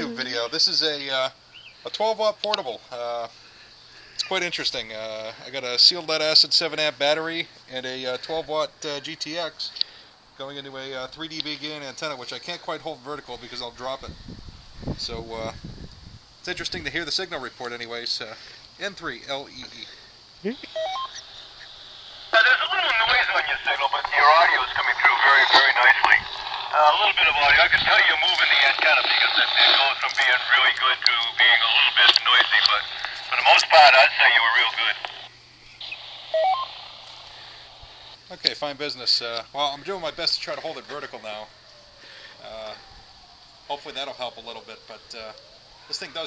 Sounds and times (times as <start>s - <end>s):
Speech: 0.0s - 3.3s, 4.2s - 9.8s, 10.4s - 14.1s, 15.0s - 15.6s, 16.5s - 20.7s, 22.4s - 35.2s, 38.3s - 41.5s, 42.4s - 42.8s, 43.7s - 46.2s
Outside, rural or natural: 6.9s - 46.2s
Radio: 20.5s - 38.2s.